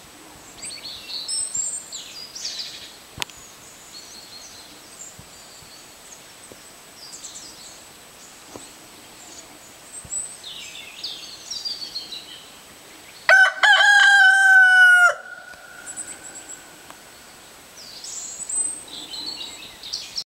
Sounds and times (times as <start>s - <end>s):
Bird vocalization, bird call, bird song: 0.4s - 13.3s, 15.5s - 20.2s.